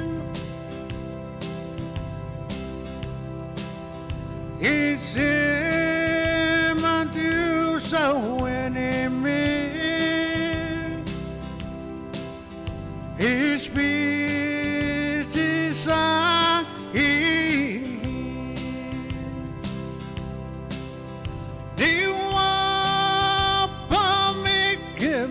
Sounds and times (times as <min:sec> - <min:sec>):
Music: 0:00.0 - 0:25.3.